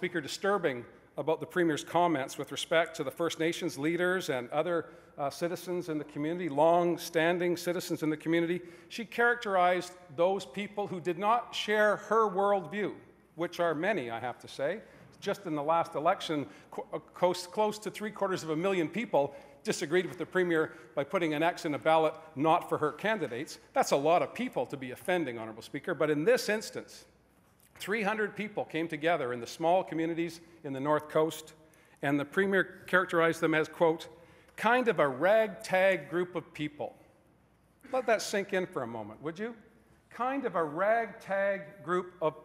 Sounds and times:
Male speech, man speaking: 0:00.0 - 0:27.1, 0:27.8 - 0:37.0, 0:37.9 - 0:42.4
Narration, monologue: 0:00.0 - 0:42.4.

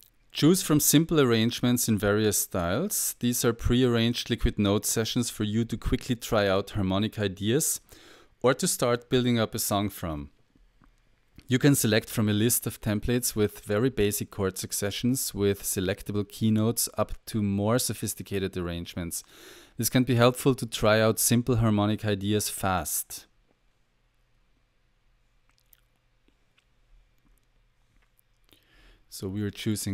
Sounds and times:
Speech: 0:00.4 - 0:10.4, 0:11.4 - 0:23.3, 0:29.1 - 0:29.9.

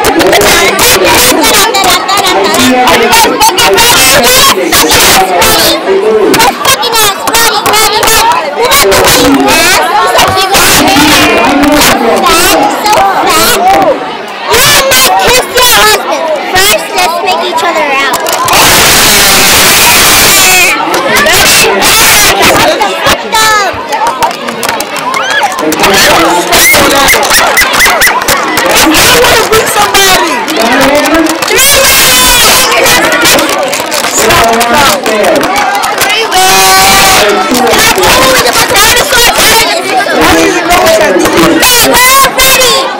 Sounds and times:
Inside, large room or hall: 0:00.0 - 0:42.9
Child speech, kid speaking: 0:00.3 - 0:05.8, 0:06.4 - 0:11.5, 0:14.6 - 0:18.3, 0:22.3 - 0:24.2, 0:35.7 - 0:37.0.

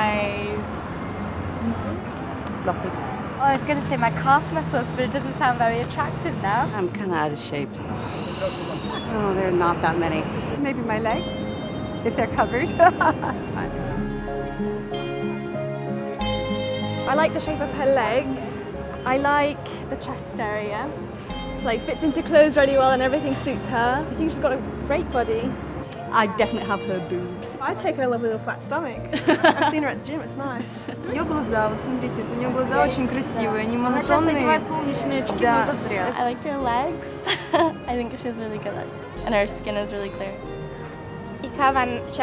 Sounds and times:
Music: 0:00.0 - 0:42.2.

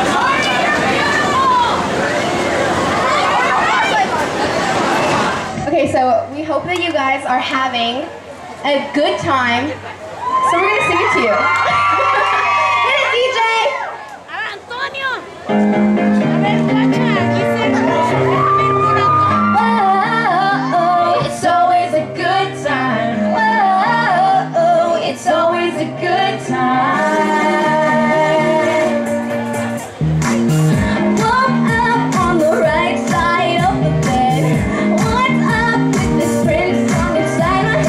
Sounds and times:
Music: 0:15.5 - 0:37.8
Female singing: 0:19.5 - 0:29.1, 0:31.0 - 0:37.8.

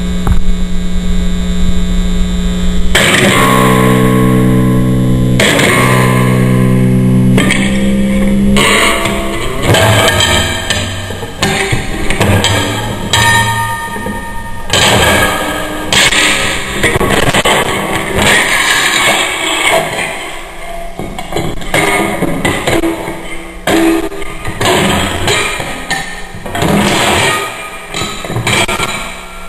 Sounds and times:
Electric guitar: 0:00.0 - 0:29.4.

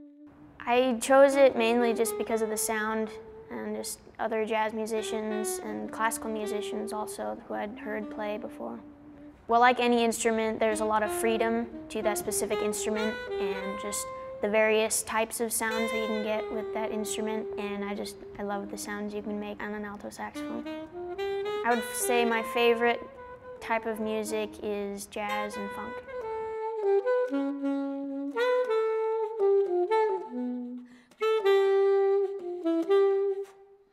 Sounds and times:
Saxophone: 0:00.0 - 0:33.9
Speech: 0:00.6 - 0:08.8, 0:09.5 - 0:20.7, 0:21.7 - 0:26.0.

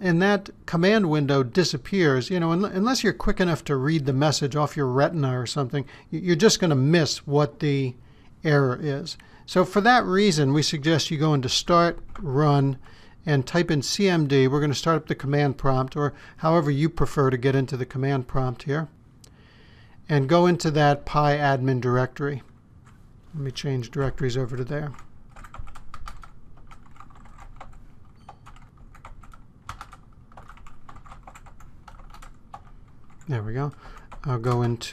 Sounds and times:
Computer keyboard: 0:24.5 - 0:34.7.

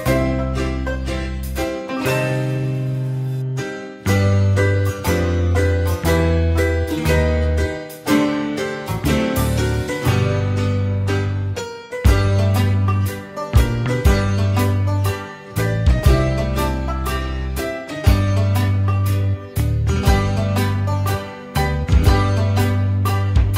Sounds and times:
Music: 0:00.0 - 0:23.5.

